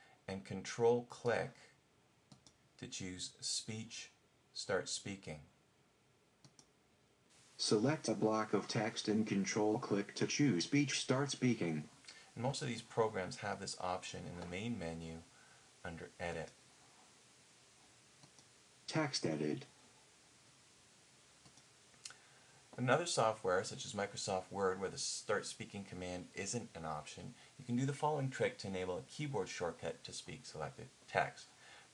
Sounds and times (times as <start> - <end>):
Speech: 0.3 - 1.7, 2.8 - 5.5, 7.6 - 16.6, 18.9 - 19.8, 22.8 - 31.5.